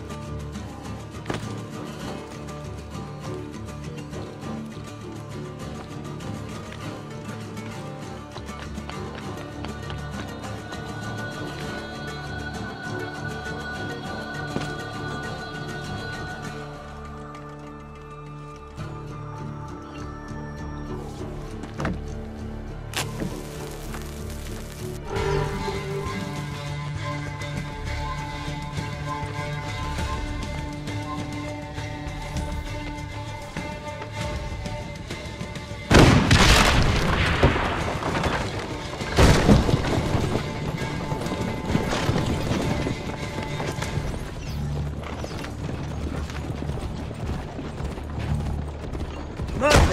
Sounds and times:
Music: 0:00.0 - 0:49.9.

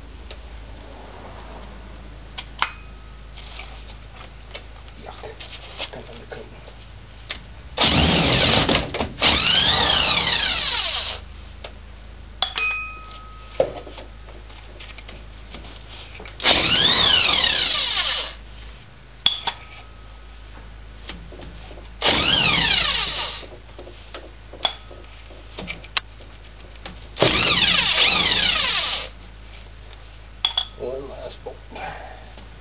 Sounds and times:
Speech: 0:05.0 - 0:06.7, 0:30.8 - 0:32.2.

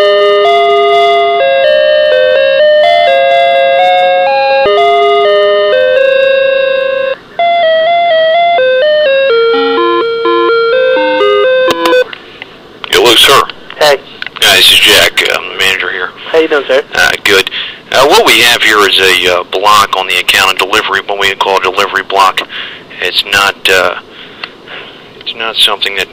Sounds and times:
Music: 0:00.0 - 0:12.1
Speech: 0:12.9 - 0:24.0, 0:25.2 - 0:26.1.

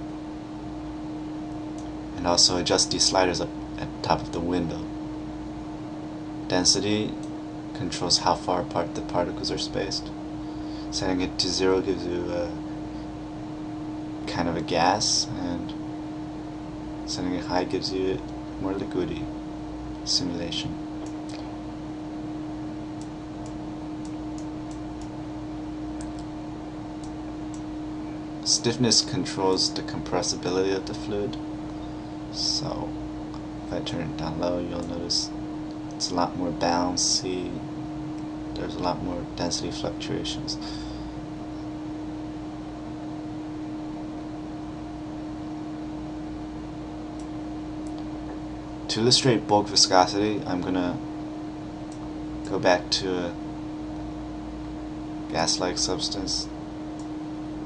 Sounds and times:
Speech: 0:02.2 - 0:04.9, 0:06.5 - 0:07.2, 0:07.8 - 0:10.2, 0:10.9 - 0:12.6, 0:14.3 - 0:15.8, 0:17.1 - 0:19.3, 0:20.0 - 0:20.8, 0:28.4 - 0:31.4, 0:32.3 - 0:33.0, 0:33.7 - 0:35.4, 0:36.0 - 0:37.7, 0:38.6 - 0:40.7, 0:48.9 - 0:51.0, 0:52.5 - 0:53.4, 0:55.3 - 0:56.5.

